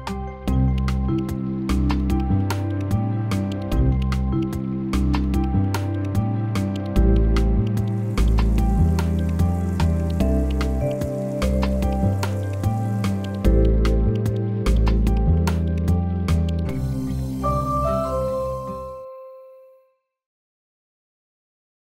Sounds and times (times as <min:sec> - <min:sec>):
Music: 0:00.0 - 0:20.3.